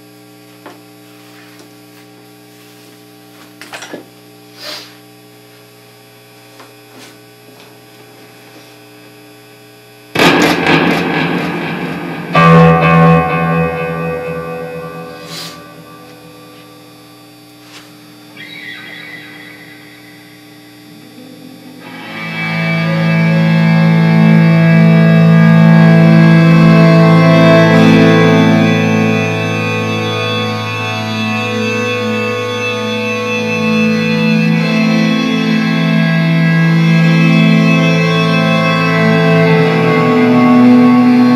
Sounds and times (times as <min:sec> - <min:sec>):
Strum: 0:10.2 - 0:16.7, 0:20.9 - 0:41.3.